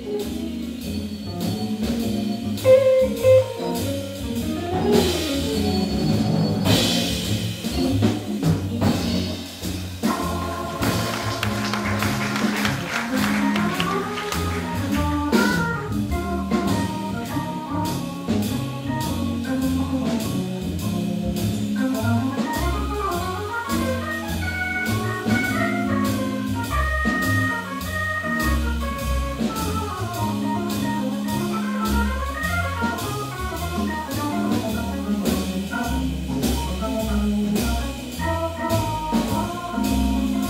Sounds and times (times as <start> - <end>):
Drum kit: 0.0 - 40.4
Jazz: 0.0 - 40.4.